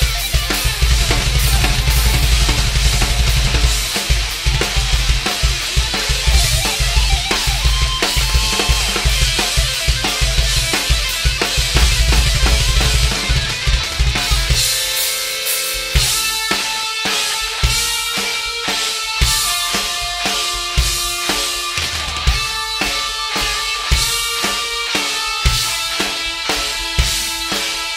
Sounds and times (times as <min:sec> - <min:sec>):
Drum: 0:00.0 - 0:16.7
Drum kit: 0:00.0 - 0:27.9
Heavy metal: 0:00.0 - 0:27.9.